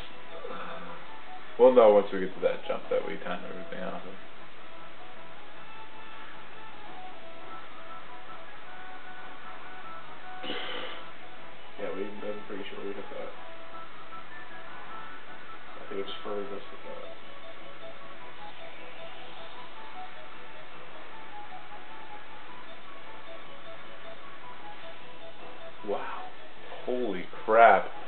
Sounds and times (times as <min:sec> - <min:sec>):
Music: 0:00.0 - 0:28.0
Speech: 0:01.6 - 0:04.2, 0:11.8 - 0:13.3, 0:15.8 - 0:17.0, 0:26.8 - 0:28.0.